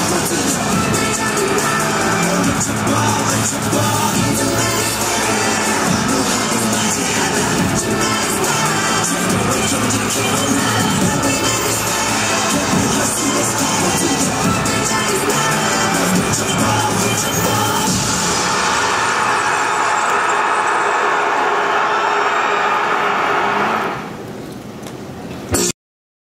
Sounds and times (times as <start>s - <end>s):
Music: 0.0s - 22.5s, 25.5s - 25.7s.